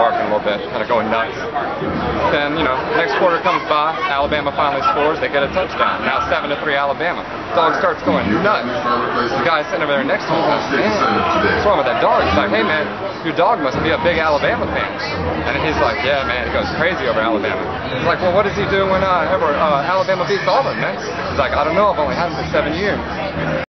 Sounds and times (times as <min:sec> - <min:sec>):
Speech: 0:00.0 - 0:23.7.